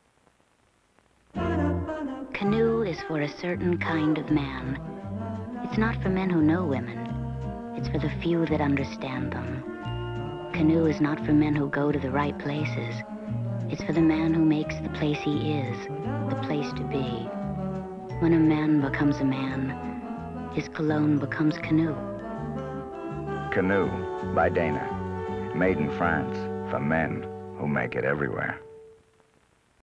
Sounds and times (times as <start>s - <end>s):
Music: 1.3s - 29.4s
Speech: 2.4s - 4.8s, 5.7s - 7.0s, 7.8s - 9.6s, 10.6s - 13.0s, 13.7s - 17.3s, 18.2s - 19.8s, 20.6s - 22.0s, 23.6s - 24.9s, 25.6s - 28.6s.